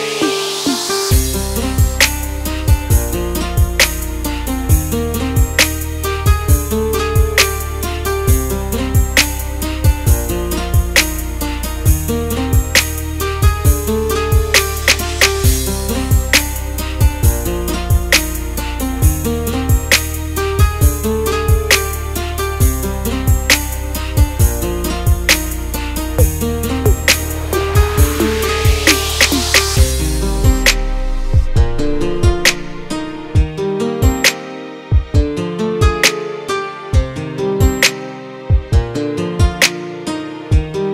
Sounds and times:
Strum: 25.4s - 30.2s.

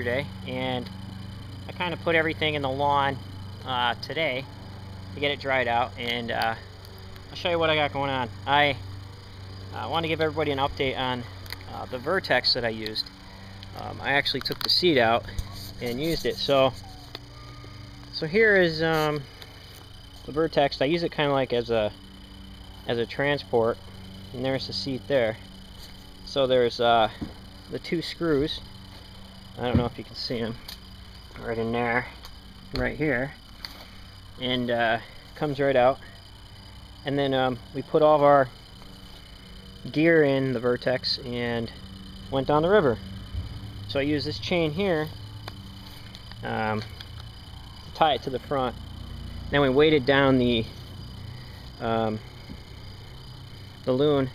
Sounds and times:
Speech: 0.0s - 0.8s, 1.7s - 4.4s, 9.8s - 13.0s, 13.8s - 16.8s, 26.3s - 28.6s, 31.4s - 32.1s, 34.4s - 36.0s, 43.9s - 45.1s, 46.4s - 46.8s, 48.0s - 48.7s, 49.5s - 50.7s, 51.8s - 52.2s.

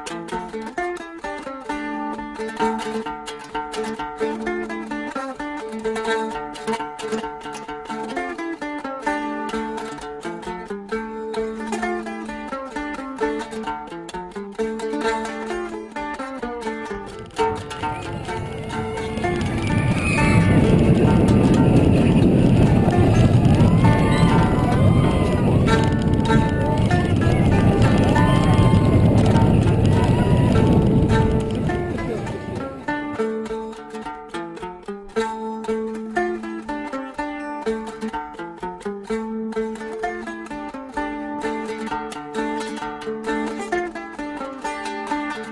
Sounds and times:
Music: 0.0s - 45.5s.

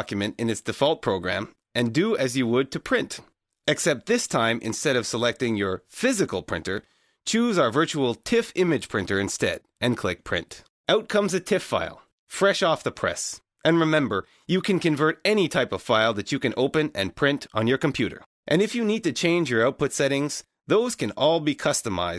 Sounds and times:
Speech: 0.0s - 22.1s.

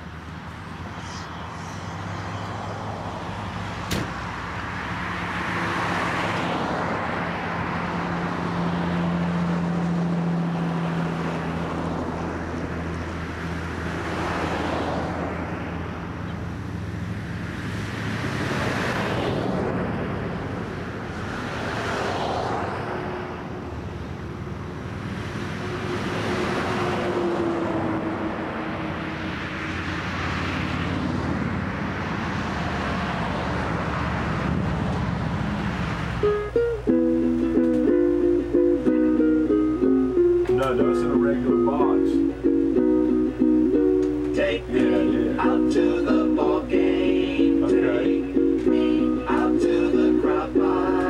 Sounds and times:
Outside, urban or manmade: 0.0s - 51.1s.

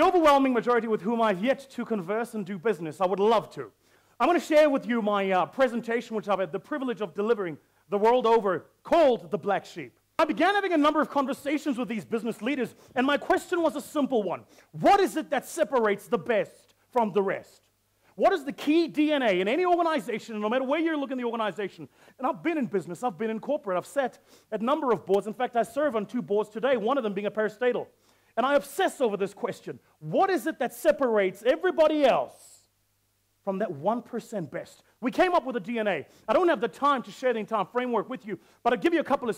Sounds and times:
Speech: 0.0s - 32.7s, 33.4s - 39.3s.

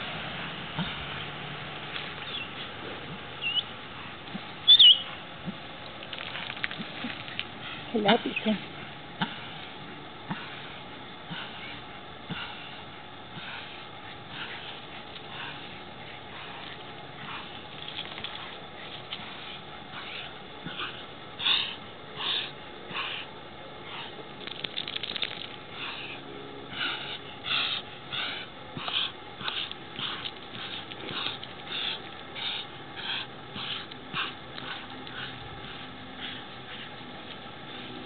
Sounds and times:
Animal: 4.7s - 5.2s, 11.3s - 37.0s.

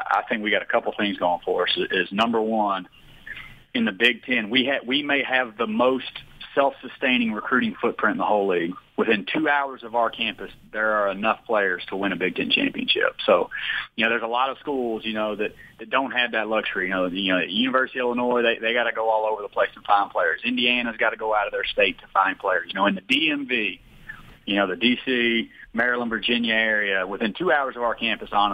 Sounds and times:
Speech: 0.0s - 23.8s, 24.5s - 28.5s.

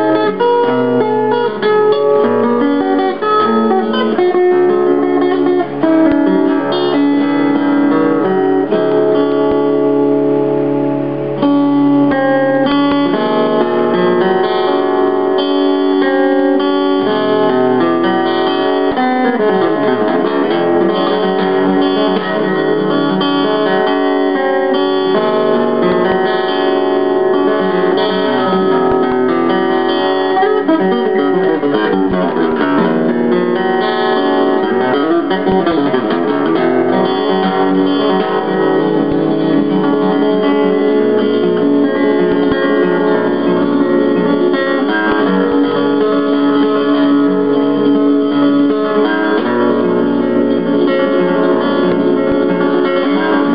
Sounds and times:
Strum: 0.0s - 53.5s.

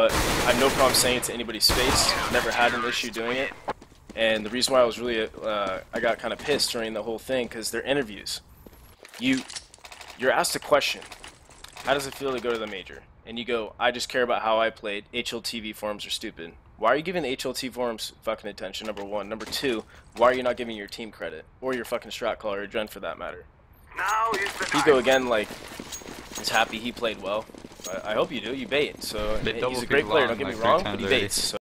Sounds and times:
Speech: 0.0s - 3.6s, 4.2s - 8.4s, 11.8s - 25.5s, 26.4s - 31.6s.

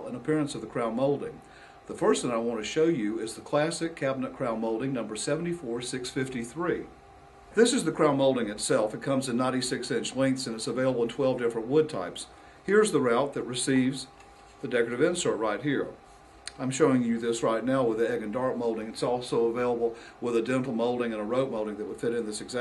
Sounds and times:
Speech: 0.0s - 7.0s, 7.6s - 22.6s.

